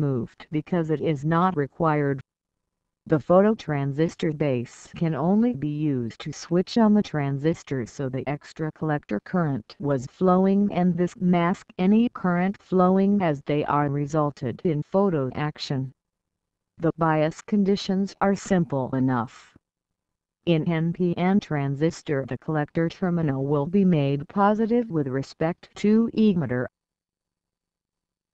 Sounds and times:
Speech synthesizer: 0:00.0 - 0:02.2, 0:03.1 - 0:15.9, 0:16.8 - 0:19.5, 0:20.5 - 0:26.7.

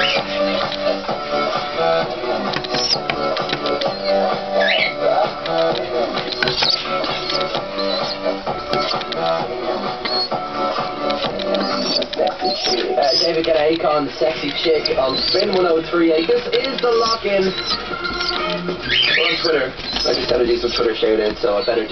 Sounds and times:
Music: 0:00.0 - 0:21.9
Speech: 0:12.2 - 0:17.8, 0:19.0 - 0:21.9.

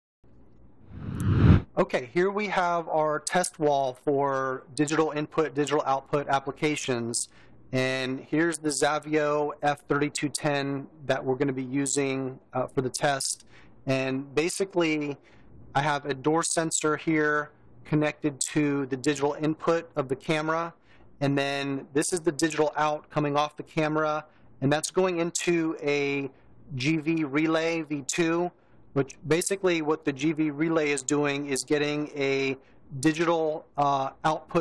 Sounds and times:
Speech: 0:01.8 - 0:15.2, 0:15.8 - 0:34.6.

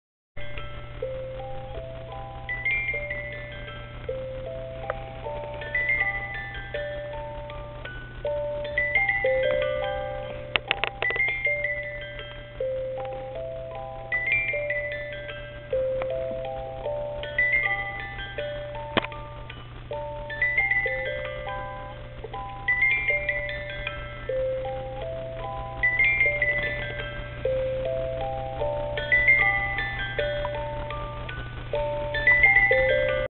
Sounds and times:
Glockenspiel: 0:00.4 - 0:33.2
Marimba, xylophone: 0:00.4 - 0:33.2.

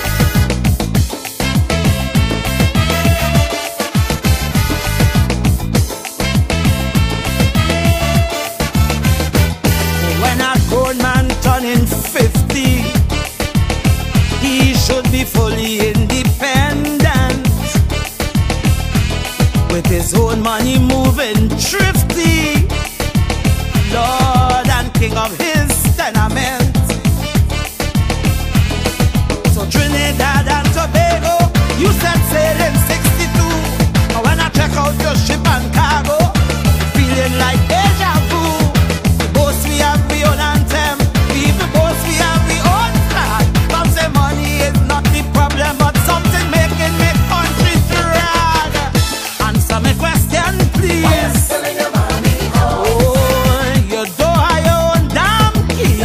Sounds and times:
Music: 0:00.0 - 0:56.0
Male singing: 0:10.1 - 0:13.0, 0:14.4 - 0:17.8, 0:19.7 - 0:22.8, 0:23.8 - 0:27.0, 0:29.5 - 0:56.0.

